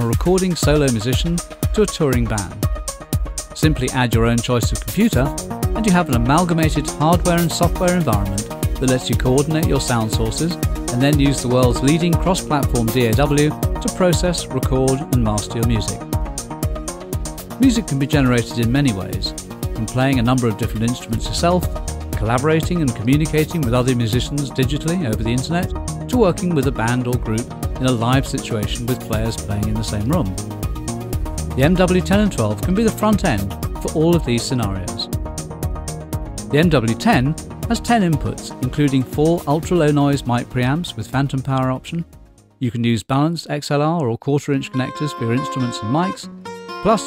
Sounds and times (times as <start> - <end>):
Speech: 0.0 - 2.6, 3.6 - 16.0, 17.6 - 30.4, 31.6 - 35.1, 36.5 - 46.3
Music: 0.0 - 42.8, 44.4 - 47.0.